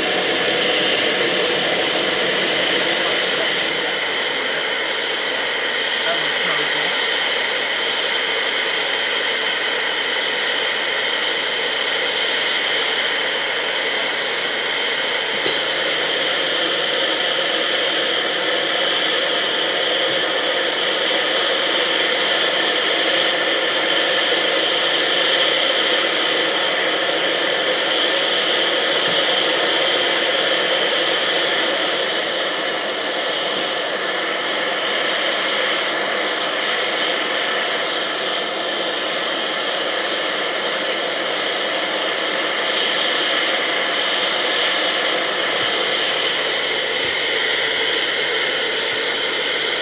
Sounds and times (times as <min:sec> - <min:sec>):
Engine: 0:00.0 - 0:49.8
Steam: 0:00.0 - 0:49.8
Train: 0:00.0 - 0:49.8.